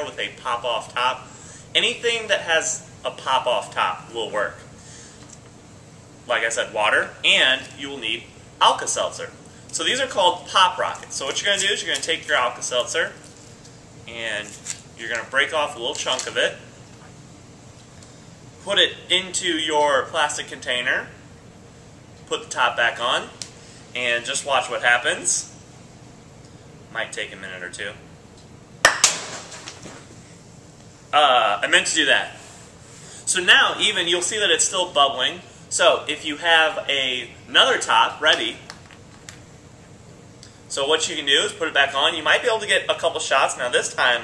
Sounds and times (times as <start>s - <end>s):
Speech: 0.0s - 4.7s, 6.3s - 13.2s, 14.1s - 16.7s, 18.6s - 21.2s, 22.3s - 23.4s, 24.0s - 25.5s, 26.9s - 28.0s, 31.2s - 32.4s, 33.3s - 38.7s, 40.7s - 44.2s.